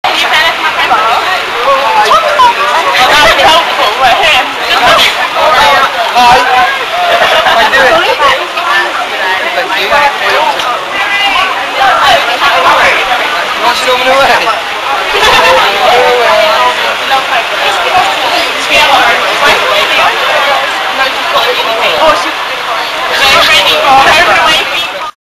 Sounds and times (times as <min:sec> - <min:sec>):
Speech: 0:00.0 - 0:25.2.